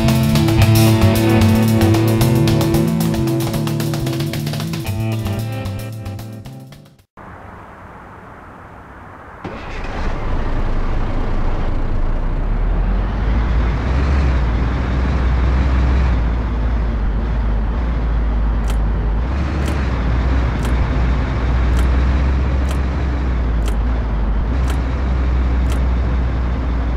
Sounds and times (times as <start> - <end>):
Truck: 0.0 - 5.4, 9.4 - 26.9.